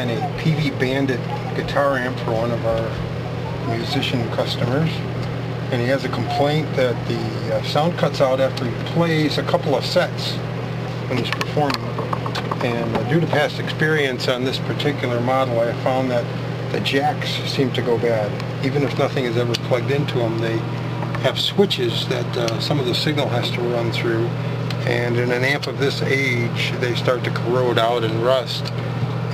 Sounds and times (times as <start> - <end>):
Speech: 0.0 - 5.1, 5.7 - 10.4, 11.1 - 11.8, 12.6 - 29.3.